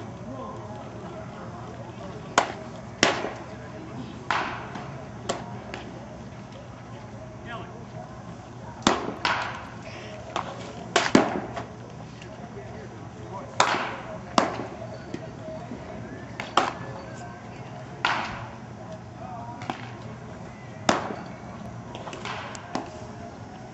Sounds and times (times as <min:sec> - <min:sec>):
Speech: 0:00.0 - 0:08.9, 0:11.6 - 0:22.0.